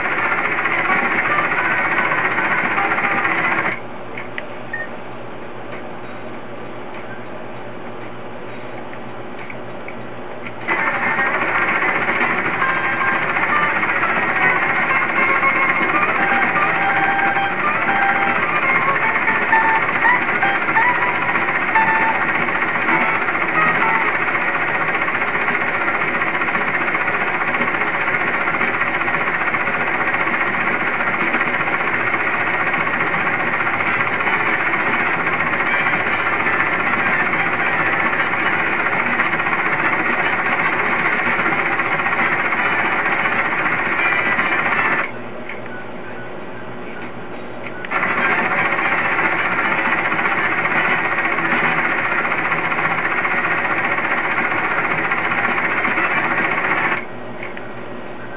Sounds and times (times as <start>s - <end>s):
Outside, urban or manmade: 0.0s - 58.3s.